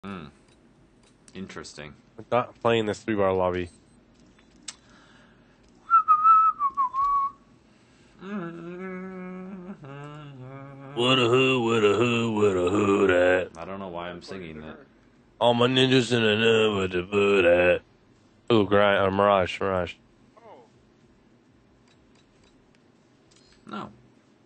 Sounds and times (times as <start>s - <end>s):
Whistling: 5.8s - 7.4s.